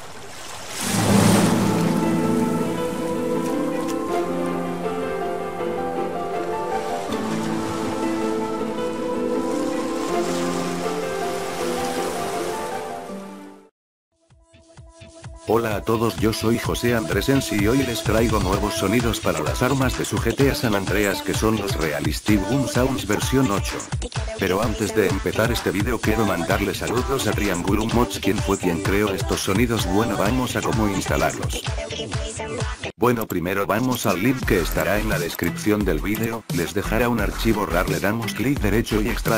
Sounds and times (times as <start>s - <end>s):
Music: 0.9s - 33.0s, 33.9s - 39.3s
Speech: 15.5s - 31.7s, 33.0s - 39.3s.